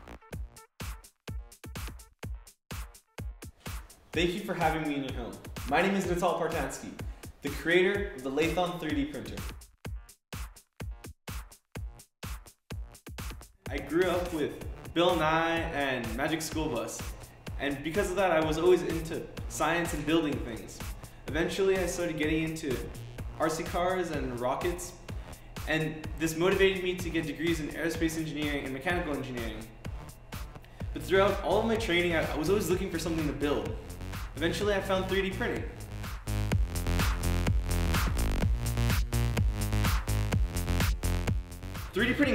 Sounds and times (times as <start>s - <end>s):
Music: 0.0s - 42.3s
Speech: 4.2s - 9.5s, 13.7s - 25.0s, 25.7s - 29.7s, 31.0s - 33.8s, 34.4s - 35.8s, 41.9s - 42.3s.